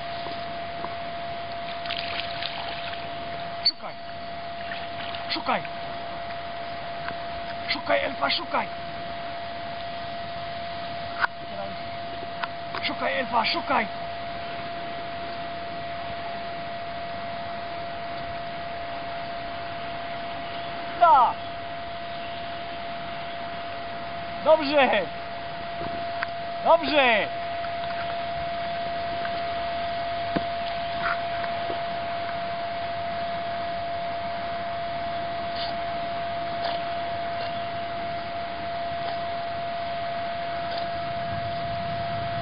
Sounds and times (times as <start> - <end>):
Speech: 5.3 - 5.7, 7.7 - 8.7, 12.8 - 13.9, 21.0 - 21.4, 24.4 - 25.1, 26.6 - 27.3.